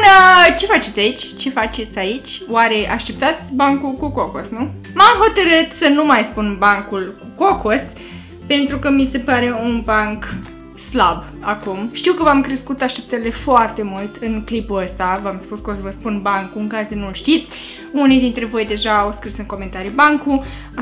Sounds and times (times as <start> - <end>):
Speech: 0.0 - 7.9, 8.5 - 20.8
Music: 0.0 - 20.8.